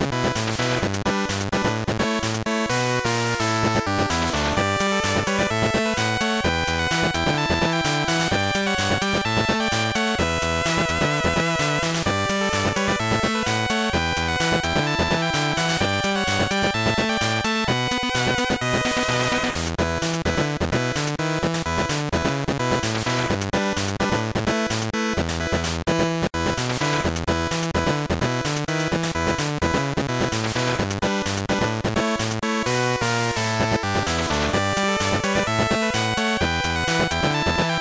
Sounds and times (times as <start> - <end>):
Exciting music: 2.1 - 19.7, 32.5 - 37.8.